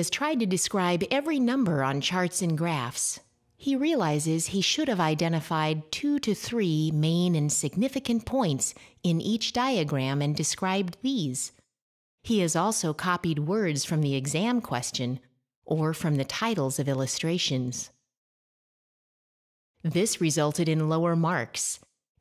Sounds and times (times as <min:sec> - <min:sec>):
Speech: 0:00.0 - 0:11.6, 0:12.3 - 0:17.9, 0:19.8 - 0:21.9.